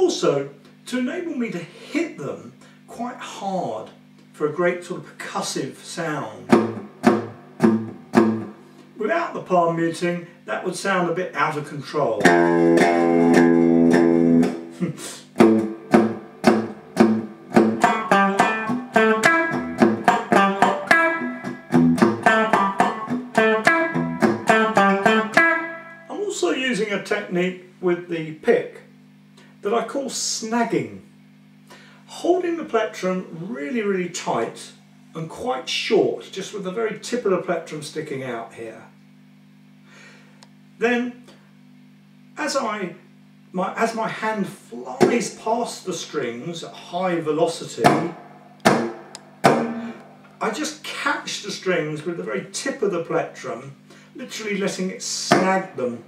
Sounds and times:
Bass guitar: 0:06.4 - 0:08.7, 0:12.2 - 0:26.1, 0:47.8 - 0:50.5.

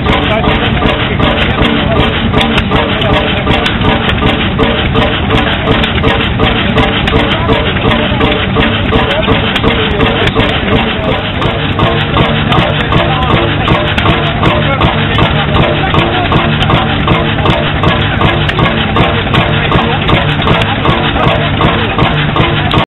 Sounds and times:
Heavy engine (low frequency): 0:00.0 - 0:22.8.

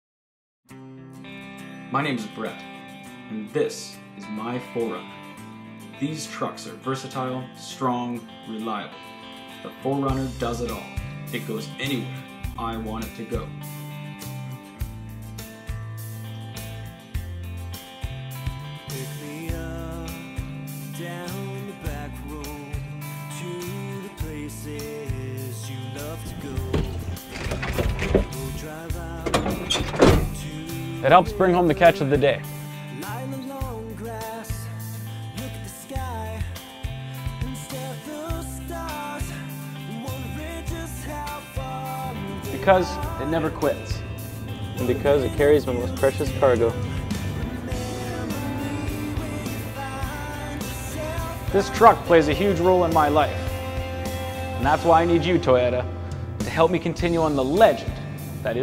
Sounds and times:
Music: 0:00.7 - 0:58.6
Speech: 0:01.9 - 0:02.7, 0:03.3 - 0:05.1, 0:06.0 - 0:09.0, 0:09.6 - 0:13.5, 0:31.0 - 0:32.5, 0:42.4 - 0:44.0, 0:44.8 - 0:46.8, 0:51.5 - 0:53.4, 0:54.6 - 0:58.6.

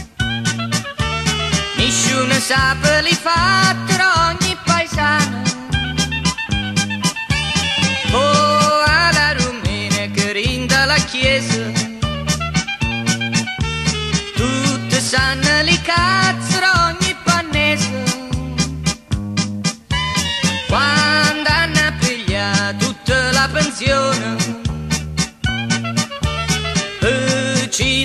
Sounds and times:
Music: 0:00.0 - 0:28.0.

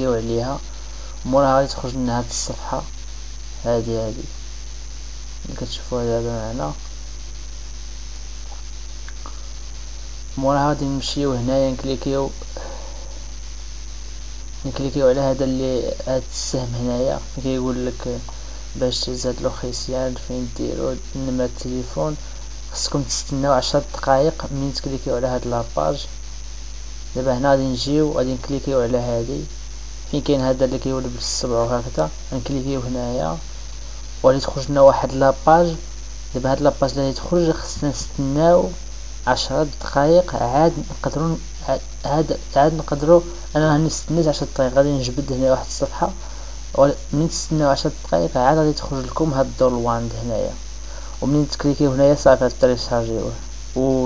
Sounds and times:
Speech: 0:00.0 - 0:02.9, 0:03.6 - 0:04.4, 0:05.4 - 0:06.9, 0:10.4 - 0:12.8, 0:14.6 - 0:26.1, 0:27.1 - 0:29.5, 0:30.1 - 0:33.4, 0:34.2 - 0:50.6, 0:51.2 - 0:54.0.

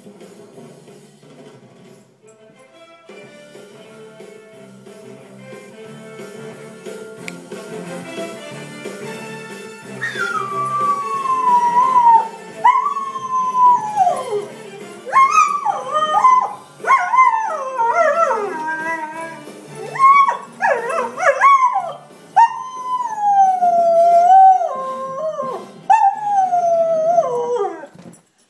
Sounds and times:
Music: 0:00.0 - 0:28.4
Howl: 0:10.0 - 0:28.0.

